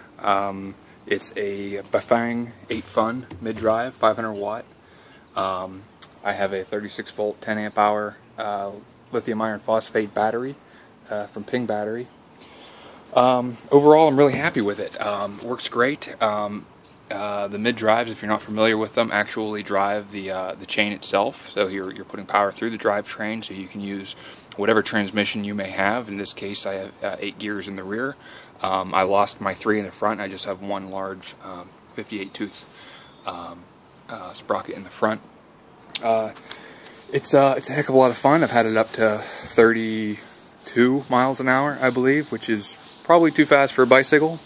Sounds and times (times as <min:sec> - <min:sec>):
Speech: 0:00.2 - 0:04.7, 0:05.4 - 0:12.1, 0:13.1 - 0:35.3, 0:36.0 - 0:36.4, 0:37.1 - 0:44.4.